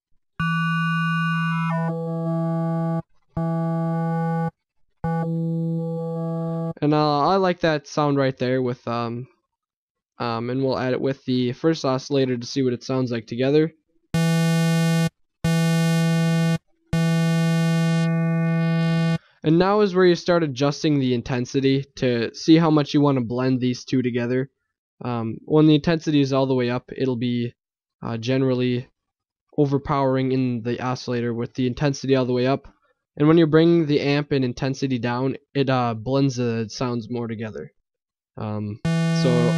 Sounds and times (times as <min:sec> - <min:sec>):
Synthesizer: 0:00.4 - 0:04.5, 0:14.2 - 0:19.2, 0:38.9 - 0:39.5
Speech: 0:06.8 - 0:09.3, 0:10.2 - 0:13.8, 0:19.4 - 0:28.9, 0:29.6 - 0:37.7, 0:38.4 - 0:39.5.